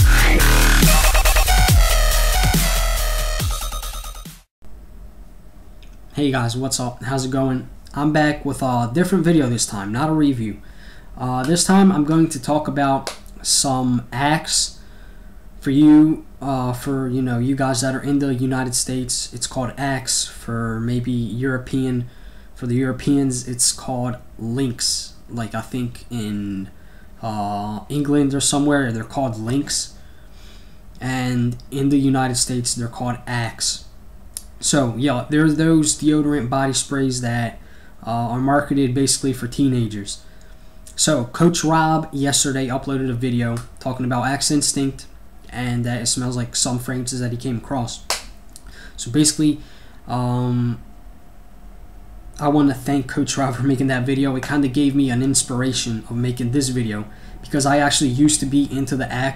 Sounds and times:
Speech: 0:06.1 - 0:10.6, 0:11.2 - 0:14.8, 0:15.6 - 0:30.0, 0:31.0 - 0:33.9, 0:34.6 - 0:40.2, 0:40.9 - 0:48.1, 0:49.0 - 0:50.8, 0:52.4 - 0:59.3.

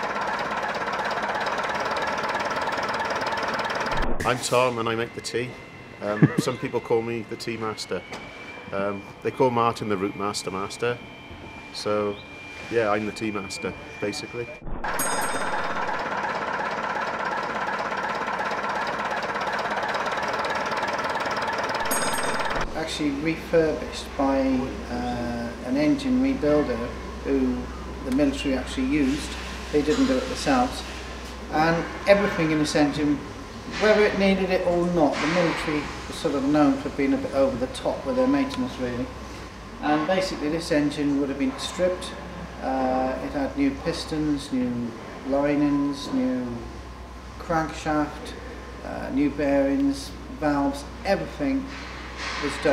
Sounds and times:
Heavy engine (low frequency): 0:00.0 - 0:52.7
Speech: 0:04.2 - 0:08.0, 0:08.7 - 0:11.0, 0:11.8 - 0:14.6, 0:22.8 - 0:30.9, 0:31.5 - 0:39.1, 0:39.8 - 0:46.7, 0:47.4 - 0:51.7, 0:52.4 - 0:52.7.

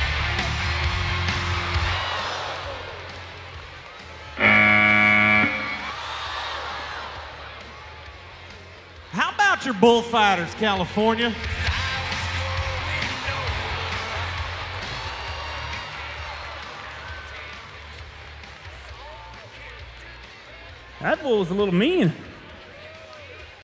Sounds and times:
Music: 0:00.0 - 0:23.6
Speech: 0:09.1 - 0:11.6, 0:21.0 - 0:22.3.

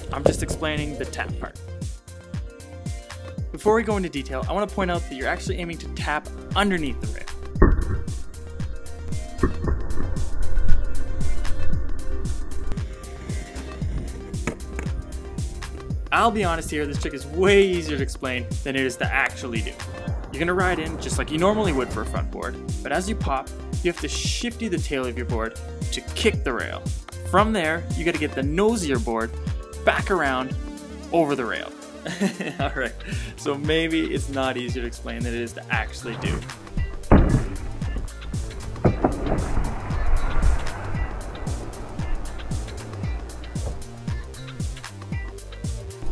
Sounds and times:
Speech: 0:00.0 - 0:01.6, 0:03.5 - 0:07.3, 0:16.1 - 0:31.8, 0:32.6 - 0:36.5
Music: 0:00.0 - 0:46.1.

